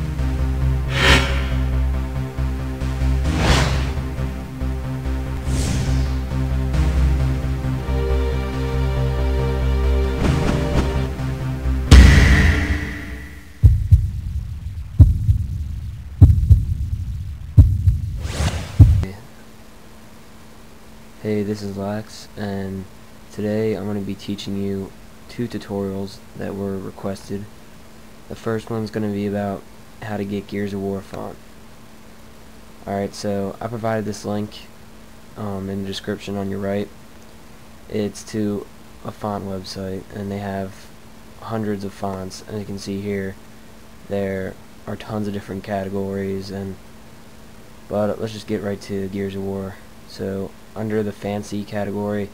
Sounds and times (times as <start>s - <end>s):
Speech: 19.0s - 19.4s, 21.2s - 27.5s, 28.3s - 31.4s, 32.8s - 34.8s, 35.4s - 37.0s, 37.9s - 43.4s, 44.1s - 46.8s, 47.9s - 52.3s.